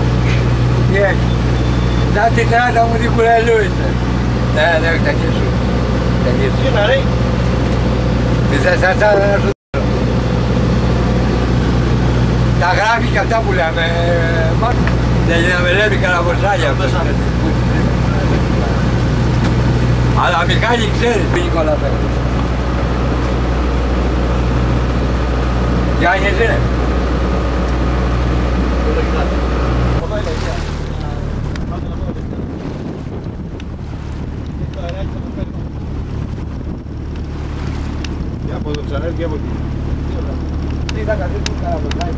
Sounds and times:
Outside, rural or natural: 0:00.0 - 0:42.1
Ship: 0:00.0 - 0:42.1
Speech: 0:02.1 - 0:05.6, 0:08.5 - 0:09.9, 0:12.6 - 0:18.9, 0:20.2 - 0:22.1, 0:26.0 - 0:26.7, 0:30.0 - 0:32.4, 0:34.8 - 0:35.6, 0:38.4 - 0:39.5, 0:40.1 - 0:42.1.

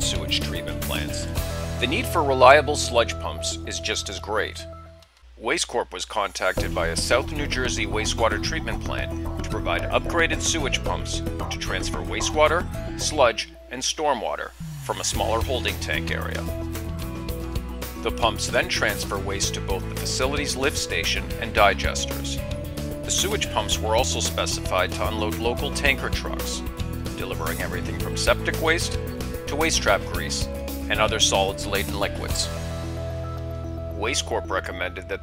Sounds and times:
Speech: 0:00.0 - 0:04.7, 0:05.4 - 0:16.5, 0:18.0 - 0:22.4, 0:23.1 - 0:32.6, 0:34.0 - 0:35.2
Music: 0:00.0 - 0:05.3, 0:06.3 - 0:35.2.

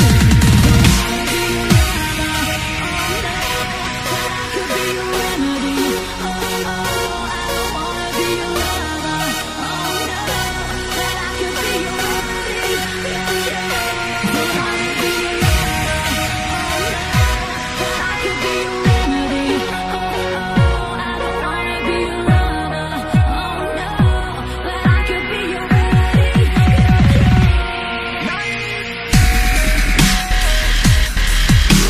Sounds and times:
Dubstep: 0:00.0 - 0:31.8.

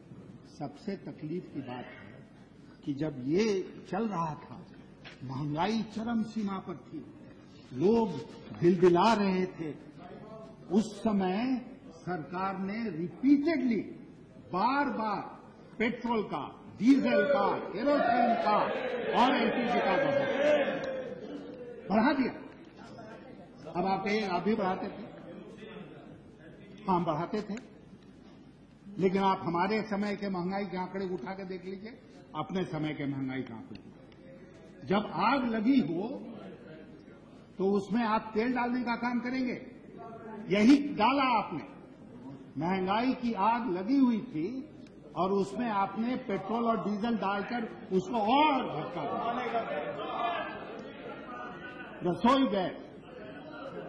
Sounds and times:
Narration, monologue: 0:00.0 - 0:53.8
Male speech, man speaking: 0:00.5 - 0:02.2, 0:02.8 - 0:27.7, 0:28.9 - 0:53.8.

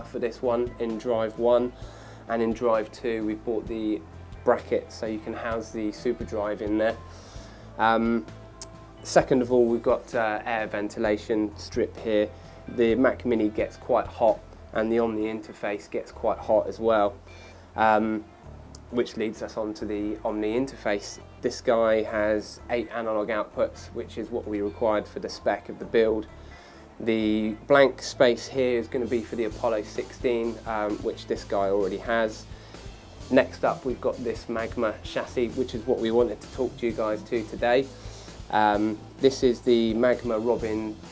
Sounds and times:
Speech: 0:00.0 - 0:01.7, 0:02.3 - 0:07.0, 0:07.8 - 0:08.3, 0:09.0 - 0:17.2, 0:17.8 - 0:18.2, 0:18.8 - 0:26.3, 0:27.0 - 0:32.5, 0:33.2 - 0:37.9, 0:38.5 - 0:41.0
Music: 0:00.0 - 0:41.1.

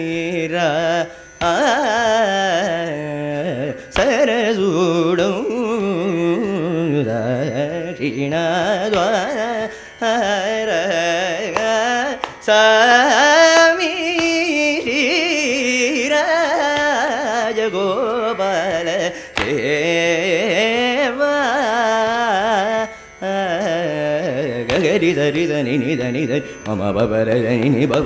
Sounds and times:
Carnatic music: 0:00.0 - 0:28.0.

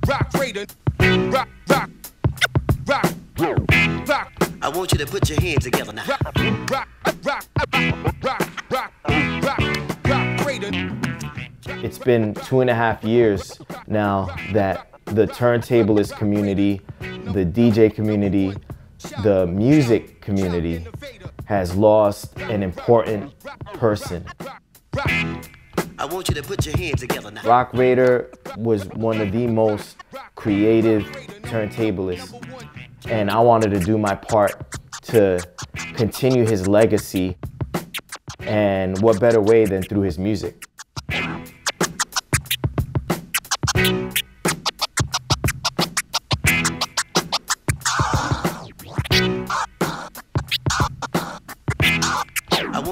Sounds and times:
Music: 0:00.0 - 0:52.9.

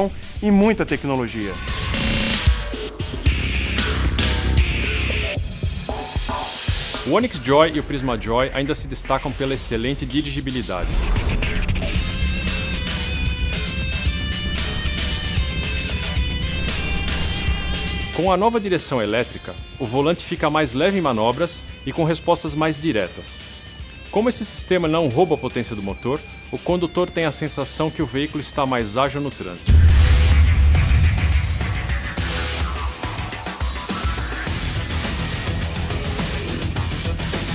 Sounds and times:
Speech: 0:00.0 - 0:01.6, 0:07.0 - 0:11.0, 0:18.1 - 0:23.5, 0:24.1 - 0:29.7
Music: 0:00.0 - 0:37.5.

